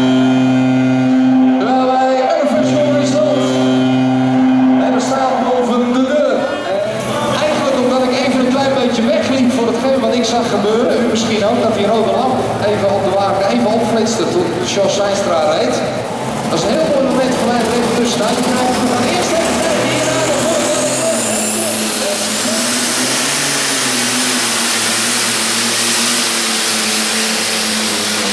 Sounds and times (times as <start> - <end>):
Vehicle: 0.0 - 28.3
Speech: 1.6 - 3.6, 4.8 - 22.8.